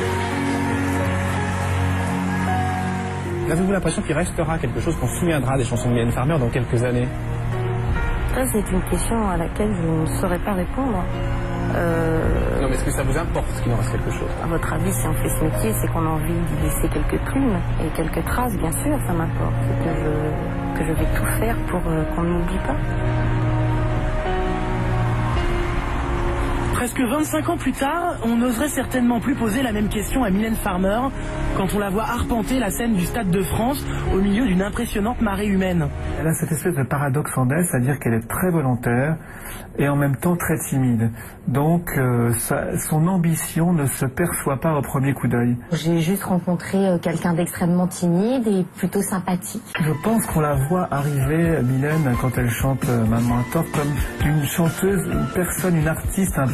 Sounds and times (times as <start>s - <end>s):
Music: 0.0s - 56.5s.